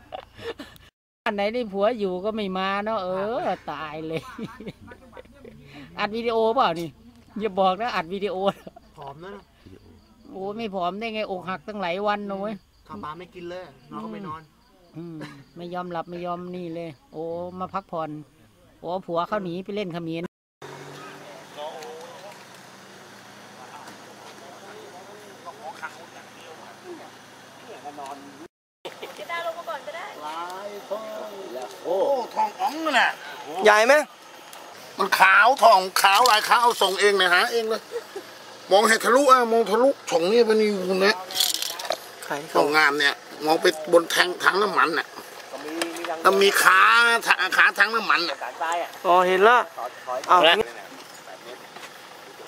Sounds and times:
Outside, urban or manmade: 0.0s - 52.4s.

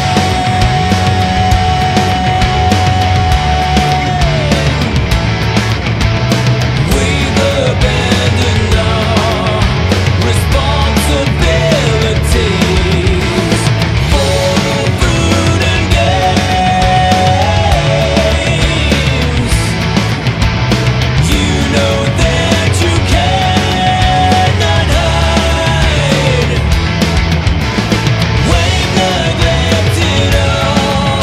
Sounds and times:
Music: 0.0s - 31.2s.

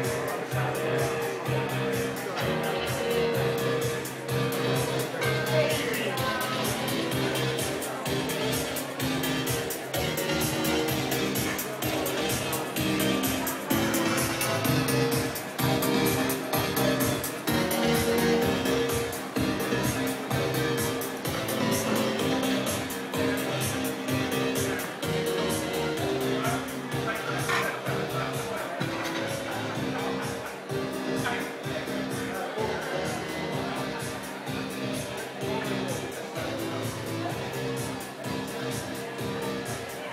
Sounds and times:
Music: 0.0s - 40.1s
Speech: 0.0s - 40.1s.

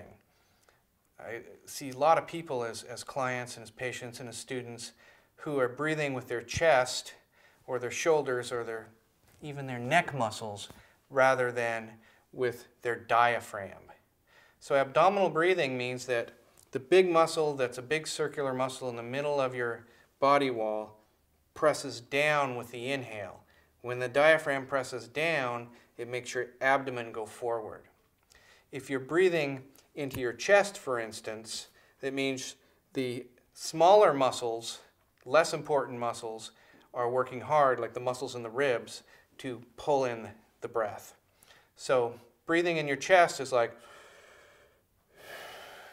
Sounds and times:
Speech: 0.0s - 0.2s, 1.2s - 14.0s, 14.6s - 21.0s, 21.6s - 28.0s, 28.7s - 41.2s, 41.8s - 43.8s.

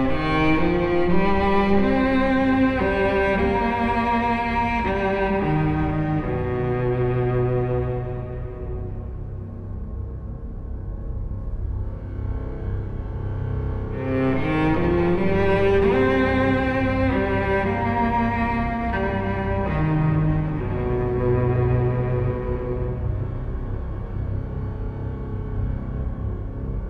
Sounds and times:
Cello: 0.0s - 26.8s.

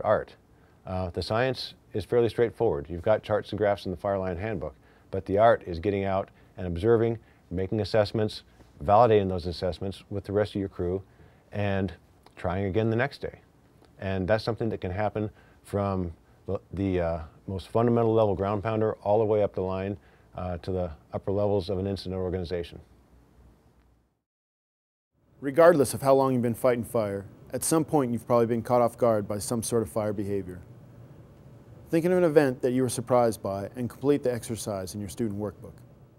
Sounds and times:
Speech: 0.0s - 22.9s, 25.4s - 30.7s, 31.9s - 35.8s.

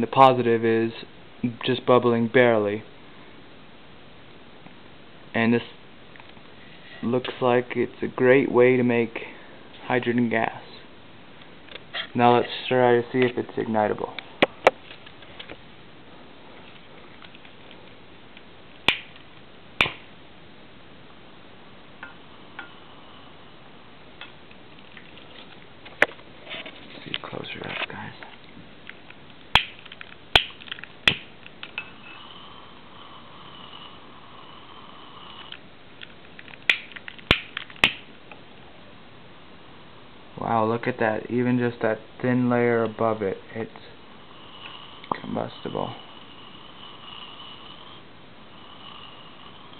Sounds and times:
Speech: 0.0s - 2.9s, 5.3s - 5.8s, 7.0s - 10.9s, 12.1s - 14.2s, 27.0s - 28.4s, 40.4s - 44.0s, 45.1s - 46.0s.

